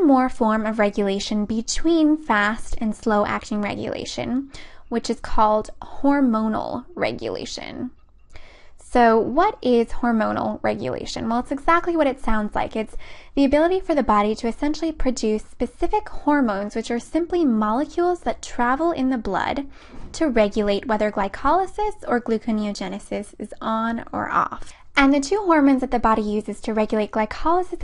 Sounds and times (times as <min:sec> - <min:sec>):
Narration, monologue: 0:00.0 - 0:27.8.